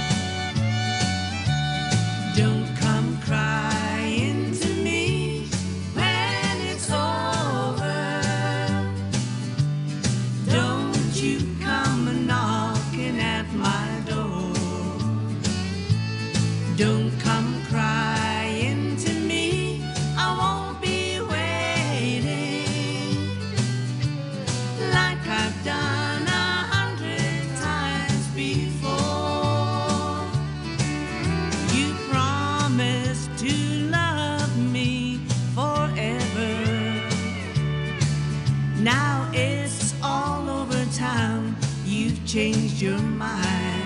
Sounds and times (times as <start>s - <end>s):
Country: 0.0s - 43.8s.